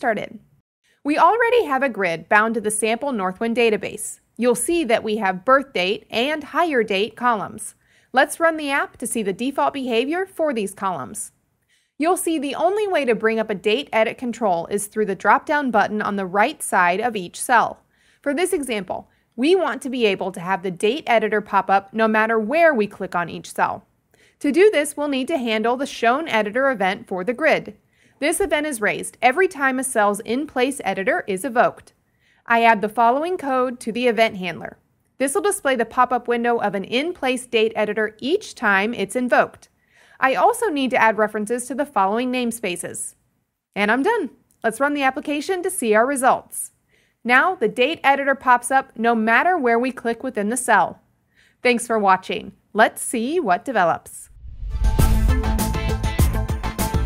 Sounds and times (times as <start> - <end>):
Speech: 0.0 - 0.4, 1.1 - 11.3, 12.0 - 23.8, 24.4 - 43.2, 43.8 - 51.0, 51.6 - 54.3.